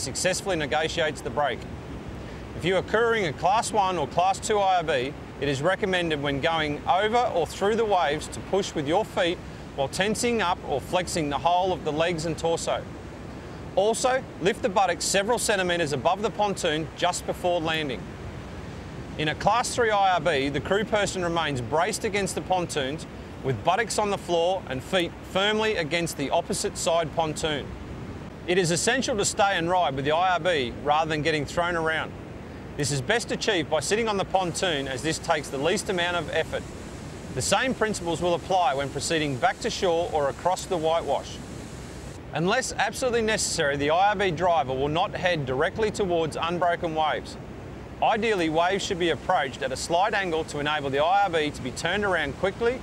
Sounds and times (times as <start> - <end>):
Speech: 0.0 - 1.7, 2.6 - 12.9, 13.8 - 18.1, 19.2 - 27.7, 28.5 - 32.2, 32.8 - 36.6, 37.4 - 41.4, 42.3 - 47.4, 48.0 - 52.8
Sailboat, sailing ship: 0.0 - 52.8
Waves, surf: 0.0 - 52.8.